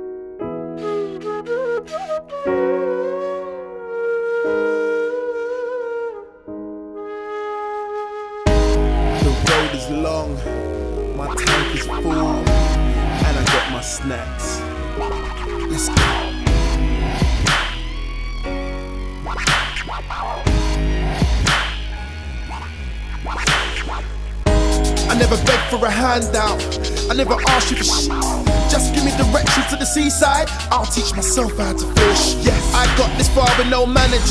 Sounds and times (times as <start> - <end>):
Wind instrument, woodwind instrument: 0.6 - 17.8
Hip hop music: 8.5 - 34.3
Rapping: 9.1 - 16.6, 25.0 - 34.3.